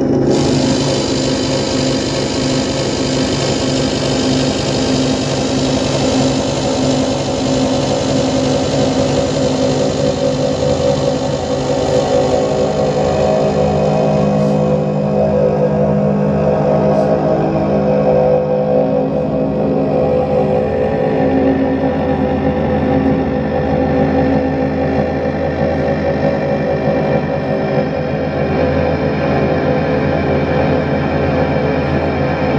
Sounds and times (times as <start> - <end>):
Didgeridoo: 0.0 - 32.5.